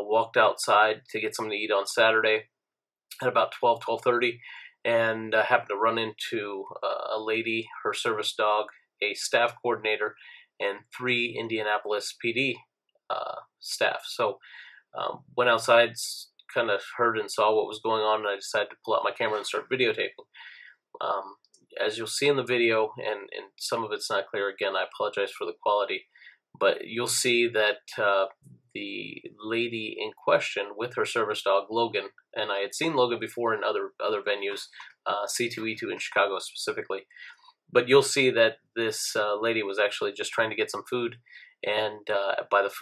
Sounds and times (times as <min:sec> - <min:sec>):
Speech: 0:00.0 - 0:02.4, 0:03.1 - 0:42.8.